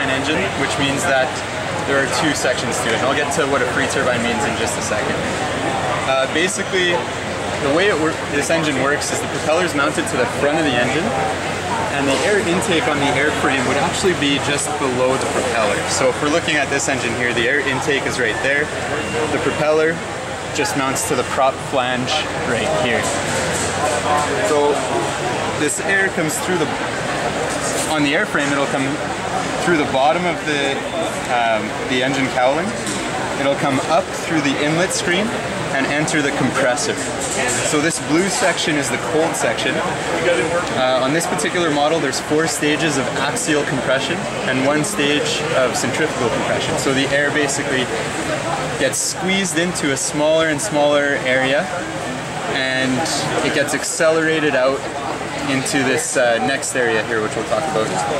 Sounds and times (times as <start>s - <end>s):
Speech: 0.0s - 58.1s.